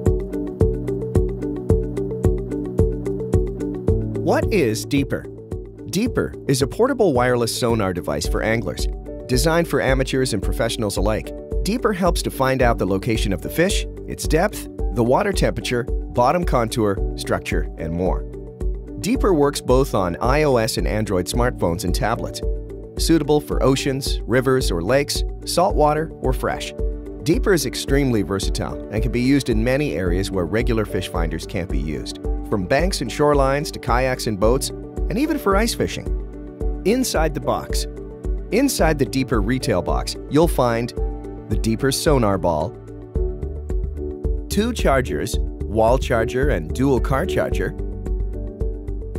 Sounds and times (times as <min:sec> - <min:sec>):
Music: 0:00.0 - 0:49.1
Speech: 0:04.3 - 0:05.3, 0:05.9 - 0:18.2, 0:19.0 - 0:22.4, 0:23.0 - 0:36.1, 0:36.9 - 0:37.9, 0:38.6 - 0:42.7, 0:44.5 - 0:47.8.